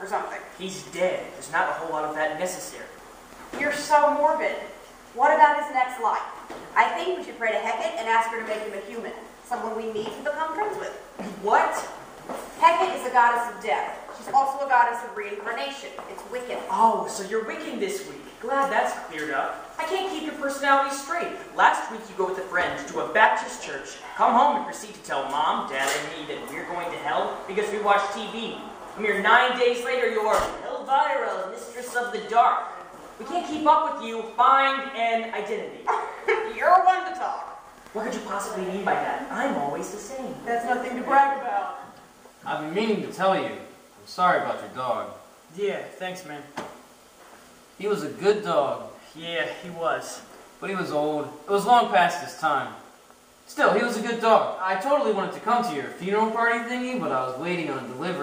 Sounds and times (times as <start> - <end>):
Speech: 12.6 - 46.6.